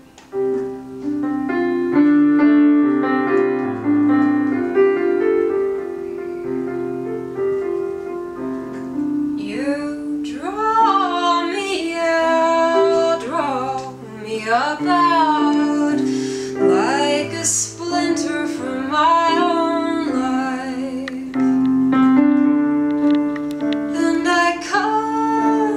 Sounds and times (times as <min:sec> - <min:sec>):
Music: 0:00.0 - 0:25.7.